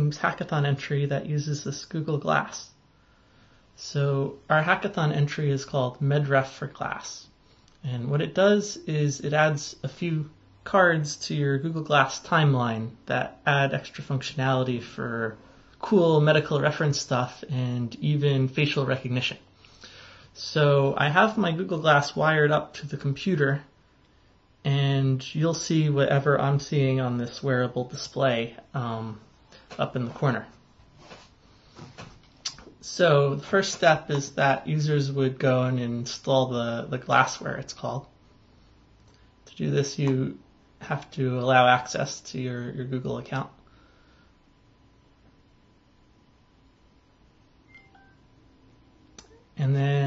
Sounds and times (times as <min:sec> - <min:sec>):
Speech: 0:00.0 - 0:02.8, 0:03.8 - 0:19.5, 0:20.4 - 0:23.7, 0:24.6 - 0:30.6, 0:32.5 - 0:38.2, 0:39.5 - 0:43.6, 0:49.6 - 0:50.0.